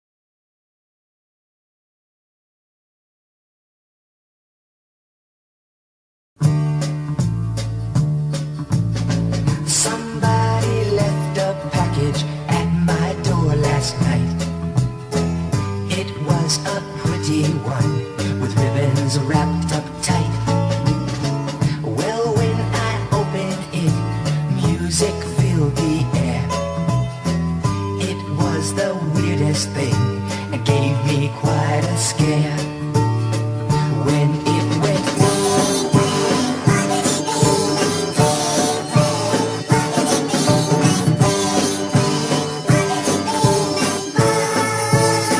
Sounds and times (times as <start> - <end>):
Music: 6.4 - 45.3.